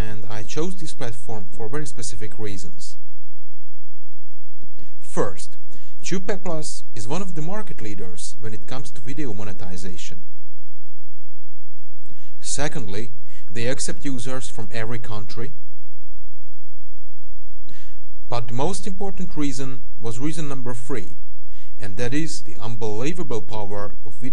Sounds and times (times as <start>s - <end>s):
Speech: 0.0s - 3.0s, 5.0s - 10.2s, 12.4s - 15.6s, 18.3s - 21.2s, 21.8s - 24.3s.